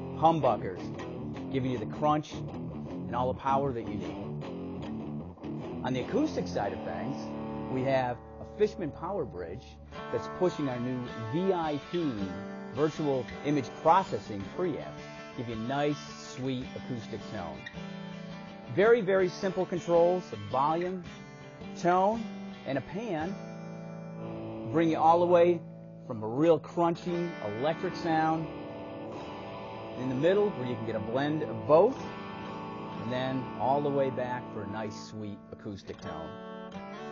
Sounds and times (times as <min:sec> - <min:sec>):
Electric guitar: 0:00.0 - 0:26.1, 0:26.8 - 0:37.1
Strum: 0:00.0 - 0:37.1
Speech: 0:00.2 - 0:02.4, 0:03.1 - 0:04.2, 0:05.8 - 0:17.6, 0:18.7 - 0:21.1, 0:21.8 - 0:23.4, 0:24.6 - 0:28.5, 0:30.0 - 0:32.1, 0:33.0 - 0:36.4.